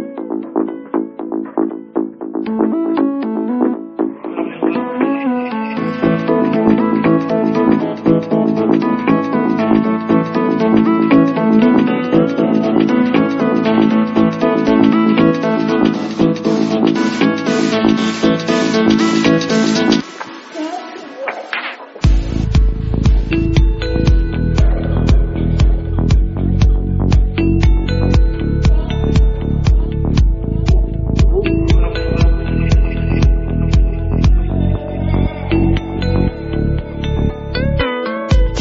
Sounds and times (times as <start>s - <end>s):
Music: 0.0s - 38.6s.